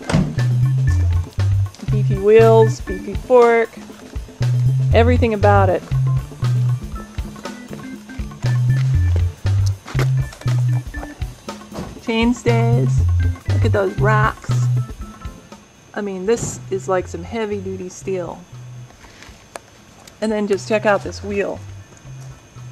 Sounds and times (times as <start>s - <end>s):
Music: 0.0s - 22.7s
Speech: 1.8s - 3.8s, 4.9s - 5.8s, 12.1s - 13.0s, 13.6s - 14.7s, 16.0s - 18.4s, 20.2s - 21.6s.